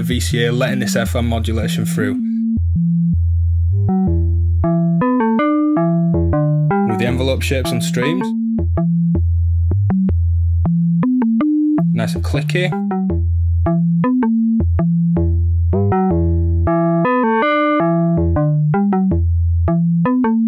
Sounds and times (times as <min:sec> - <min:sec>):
Speech: 0:00.0 - 0:02.3, 0:06.9 - 0:08.3, 0:11.9 - 0:12.8
Synthesizer: 0:03.8 - 0:09.2, 0:10.7 - 0:20.4.